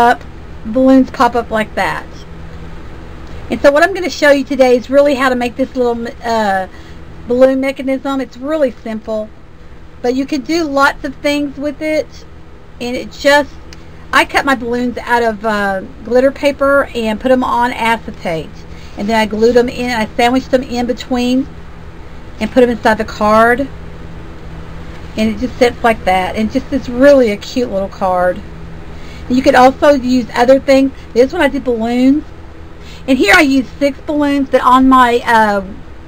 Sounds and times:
Speech: 0:00.0 - 0:02.2, 0:03.5 - 0:09.3, 0:10.0 - 0:12.2, 0:12.8 - 0:21.5, 0:22.4 - 0:23.7, 0:25.1 - 0:28.4, 0:29.2 - 0:32.3, 0:32.9 - 0:35.8.

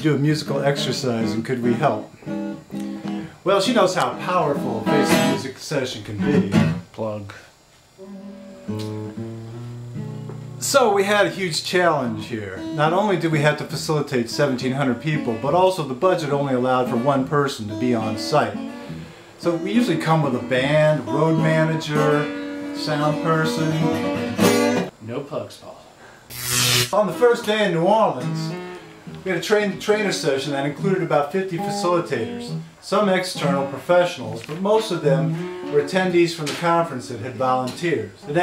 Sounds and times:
Speech: 0:00.0 - 0:02.1, 0:03.4 - 0:07.6, 0:10.6 - 0:18.6, 0:19.4 - 0:24.0, 0:25.0 - 0:25.9, 0:27.0 - 0:28.6, 0:29.2 - 0:38.4
Music: 0:00.0 - 0:06.9, 0:08.0 - 0:25.0, 0:26.4 - 0:38.4.

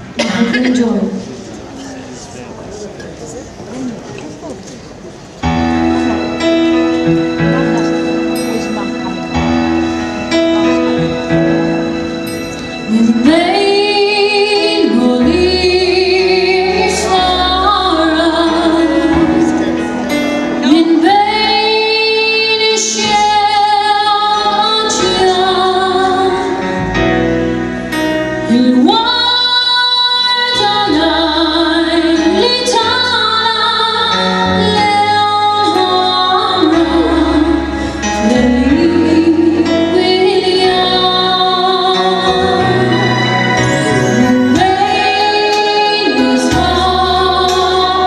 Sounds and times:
Music: 0:05.4 - 0:48.0
Female singing: 0:12.9 - 0:19.3, 0:20.6 - 0:26.6, 0:28.5 - 0:37.6, 0:38.2 - 0:43.1, 0:44.0 - 0:48.0.

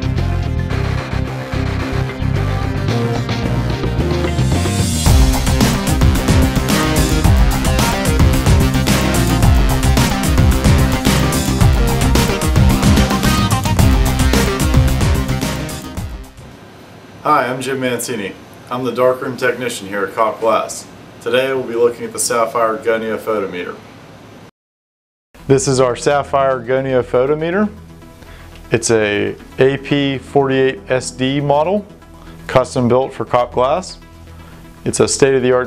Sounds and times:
Music: 0:00.0 - 0:16.5, 0:25.4 - 0:35.6
Speech: 0:17.2 - 0:23.9, 0:25.5 - 0:27.8, 0:28.7 - 0:31.9, 0:32.5 - 0:34.0, 0:34.8 - 0:35.6.

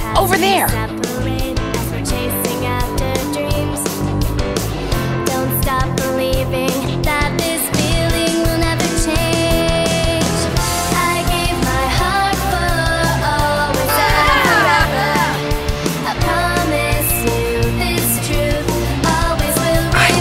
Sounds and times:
Rhythm and blues: 0:00.0 - 0:01.2, 0:13.7 - 0:20.2
Blues: 0:00.0 - 0:20.2
Pop music: 0:00.0 - 0:20.2
Exciting music: 0:00.1 - 0:00.9, 0:13.8 - 0:15.9.

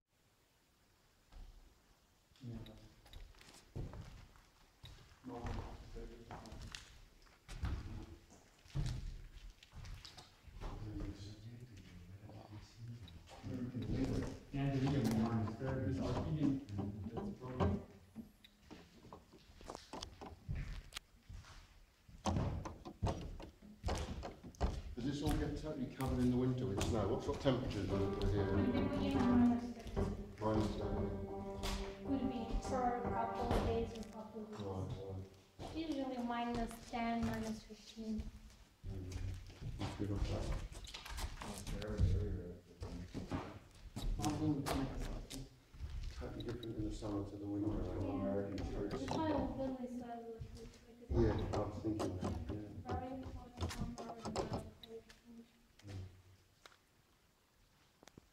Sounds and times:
Speech: 0:10.8 - 0:17.8, 0:25.0 - 0:38.3, 0:38.9 - 0:39.2, 0:39.8 - 0:40.6, 0:41.4 - 0:43.2, 0:44.2 - 0:45.5, 0:46.2 - 0:56.1
Music: 0:26.8 - 0:34.6.

